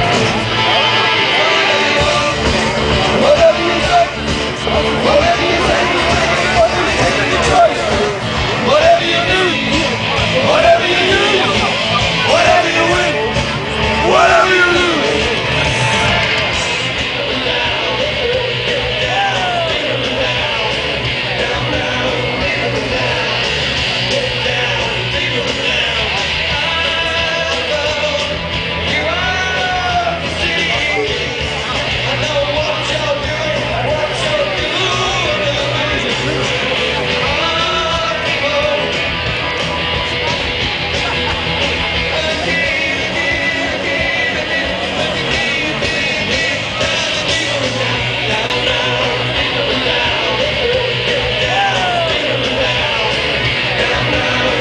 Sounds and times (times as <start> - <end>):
Music: 0.0 - 54.6
Speech: 0.0 - 54.6.